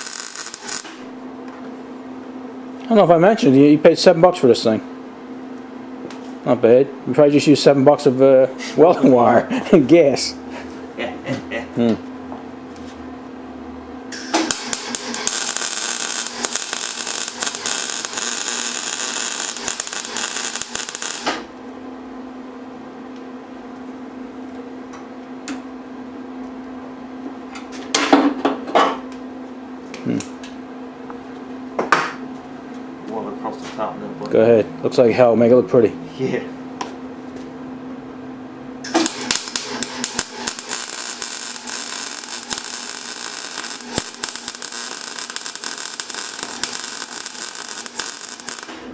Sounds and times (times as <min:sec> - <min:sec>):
Speech: 0:02.8 - 0:04.9, 0:06.4 - 0:10.4, 0:33.1 - 0:36.6.